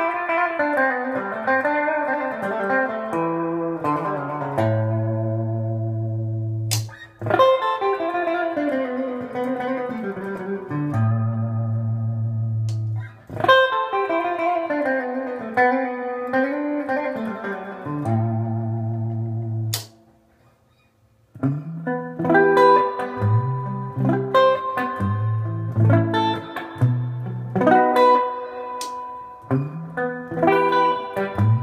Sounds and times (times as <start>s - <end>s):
Electric guitar: 0.0s - 20.1s, 21.3s - 31.6s.